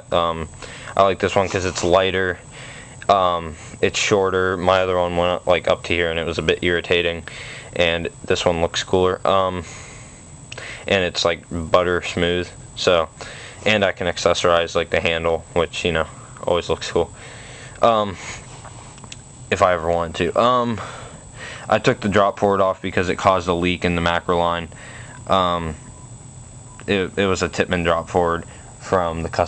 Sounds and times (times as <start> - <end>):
Speech: 0.0 - 2.4, 3.1 - 9.7, 10.9 - 17.1, 17.8 - 18.2, 19.5 - 20.9, 21.7 - 24.7, 25.3 - 25.8, 26.8 - 29.4.